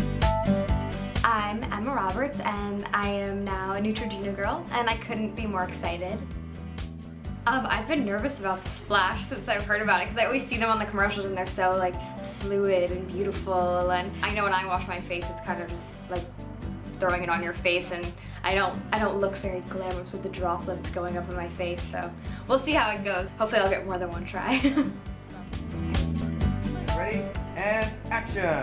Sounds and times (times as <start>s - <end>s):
Music: 0.0s - 28.6s.